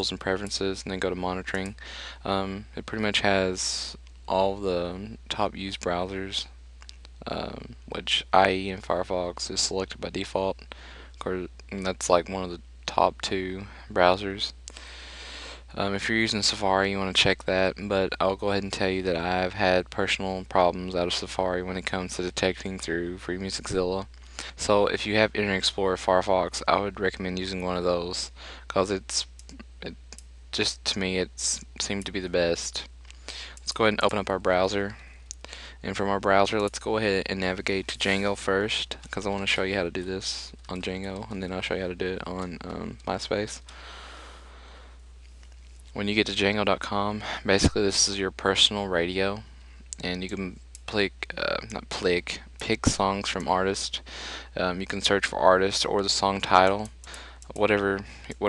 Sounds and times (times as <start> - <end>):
Speech: 0.0 - 6.6, 7.2 - 14.6, 15.7 - 43.7, 46.0 - 58.4.